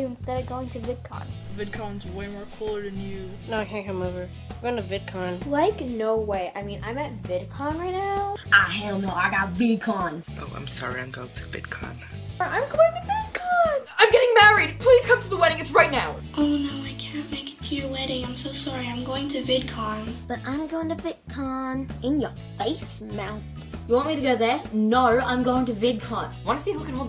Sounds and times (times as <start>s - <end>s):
Child speech, kid speaking: 0.0s - 1.3s, 3.5s - 10.2s, 12.4s - 27.0s
Music: 0.0s - 27.0s.